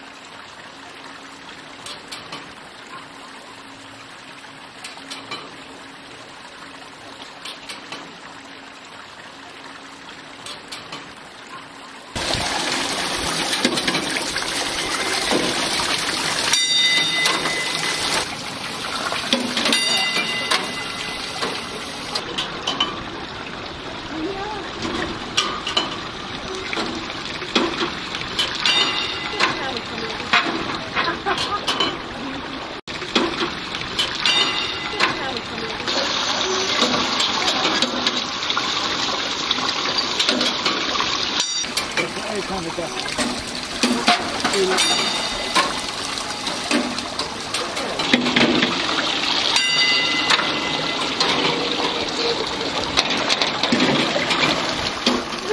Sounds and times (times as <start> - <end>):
Trickle, dribble: 0.0 - 55.5
Bell: 16.5 - 18.3, 19.7 - 22.0, 28.7 - 29.4, 34.3 - 35.1, 44.7 - 46.0, 49.6 - 51.2.